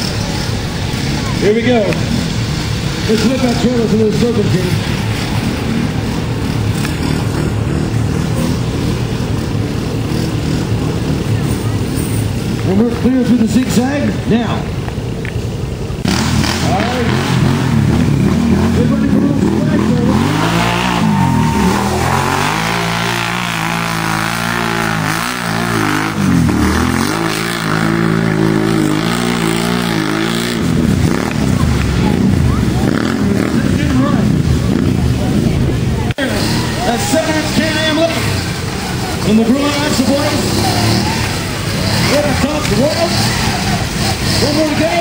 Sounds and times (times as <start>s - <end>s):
Speech: 1.1s - 2.1s, 3.0s - 4.9s, 12.6s - 14.8s, 16.6s - 17.3s, 18.6s - 20.3s, 31.5s - 45.0s.